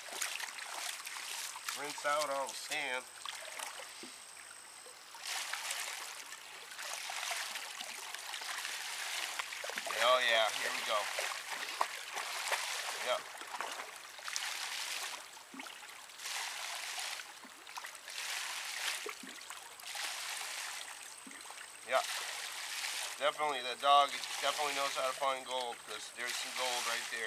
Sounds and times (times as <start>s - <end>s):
Speech: 1.8s - 3.0s, 9.9s - 11.1s, 13.0s - 13.2s, 21.9s - 22.1s, 23.2s - 27.2s.